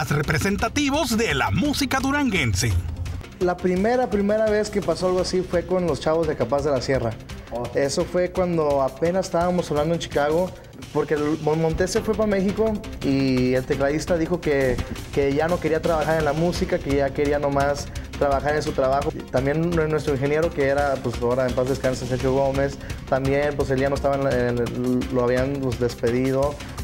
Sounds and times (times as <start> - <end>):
Speech: 0.0 - 2.8, 3.4 - 26.6.